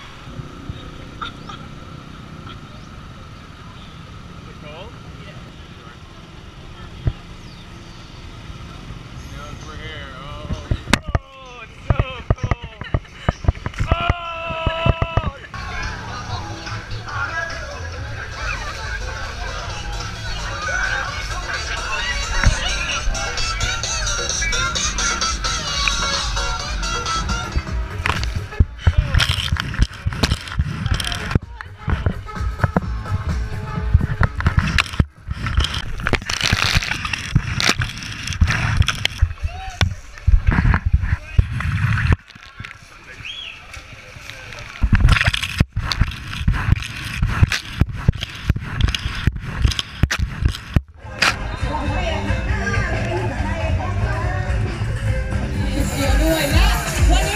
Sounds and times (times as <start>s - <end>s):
Music: 15.6s - 28.7s, 31.4s - 35.0s, 51.0s - 57.3s.